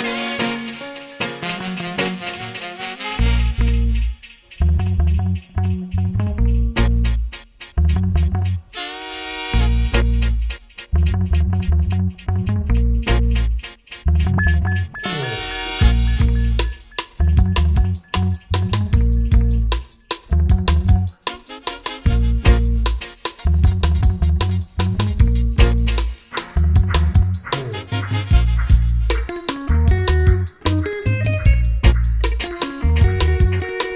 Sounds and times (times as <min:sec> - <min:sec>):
Music: 0:00.0 - 0:33.9.